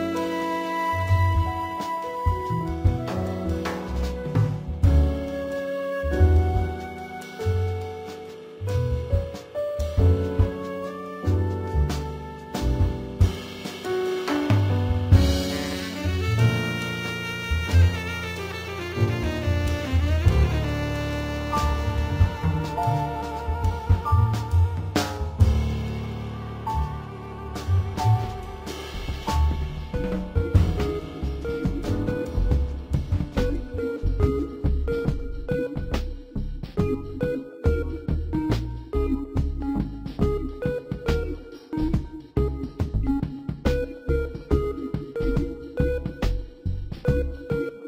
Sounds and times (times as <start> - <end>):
Music: 0.0 - 47.8.